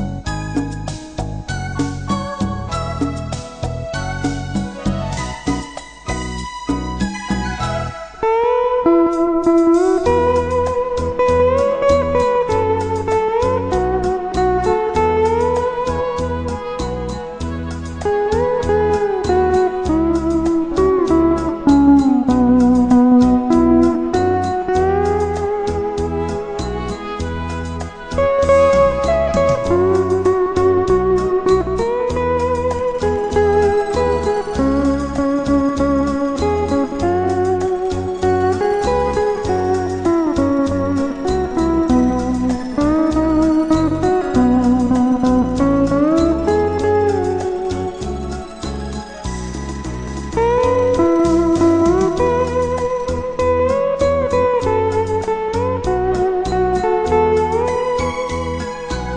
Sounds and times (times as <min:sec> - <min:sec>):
Musical instrument: 0:00.0 - 0:59.1.